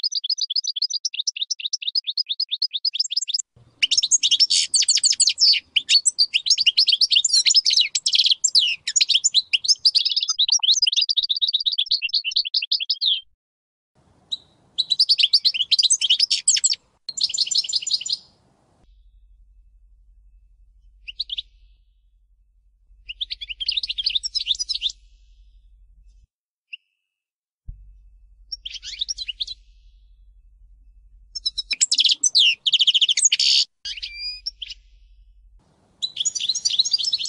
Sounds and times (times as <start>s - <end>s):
Bird vocalization, bird call, bird song: 0.0s - 13.3s, 14.3s - 18.4s, 20.9s - 21.9s, 23.0s - 27.1s, 28.5s - 30.2s, 31.3s - 35.3s, 36.0s - 37.2s.